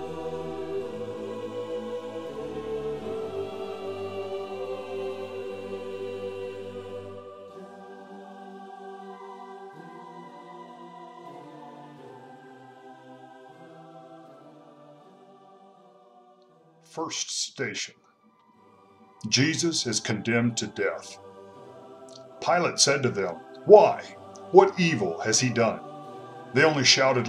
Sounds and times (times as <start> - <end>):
Chant: 0.0 - 14.1, 19.2 - 27.2.